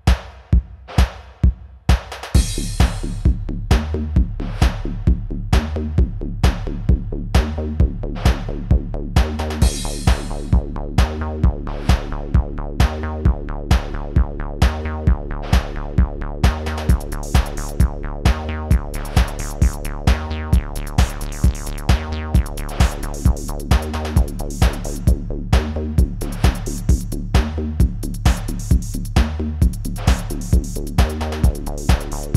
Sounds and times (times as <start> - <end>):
Techno: 1.4 - 32.3.